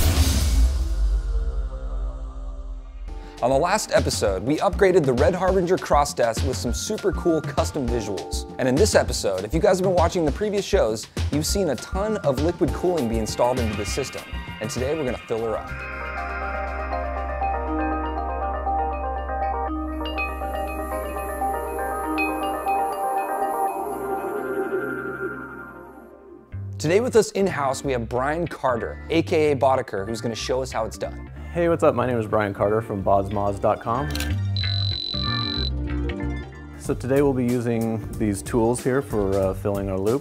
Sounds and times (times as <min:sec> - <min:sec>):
Music: 0:00.0 - 0:40.2
Speech: 0:03.4 - 0:15.7, 0:26.8 - 0:34.2, 0:36.8 - 0:40.2.